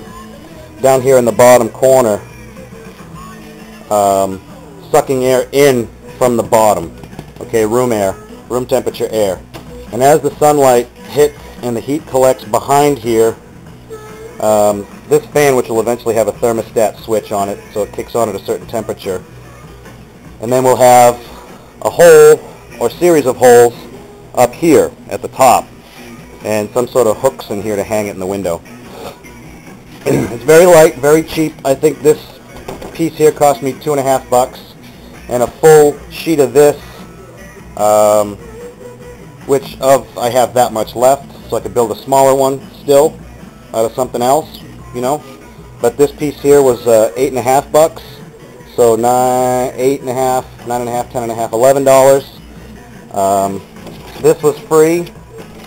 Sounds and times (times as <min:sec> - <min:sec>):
Music: 0:00.0 - 0:55.6
Speech: 0:14.4 - 0:19.2, 0:26.4 - 0:28.6, 0:30.1 - 0:32.3, 0:53.2 - 0:53.6.